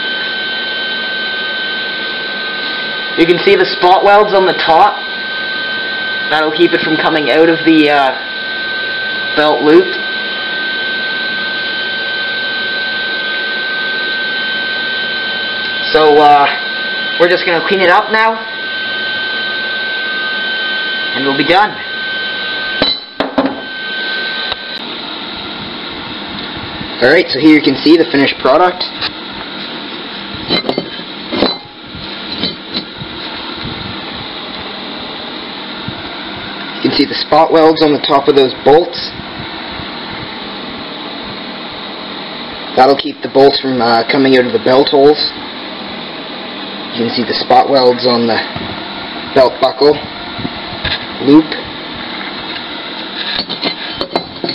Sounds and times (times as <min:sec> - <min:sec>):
Speech: 0:03.2 - 0:05.0, 0:06.3 - 0:08.2, 0:09.4 - 0:10.0, 0:15.8 - 0:16.6, 0:17.2 - 0:18.5, 0:21.2 - 0:21.8, 0:27.0 - 0:28.9, 0:36.8 - 0:39.2, 0:42.8 - 0:45.4, 0:46.9 - 0:48.6, 0:49.3 - 0:50.1, 0:51.2 - 0:51.7.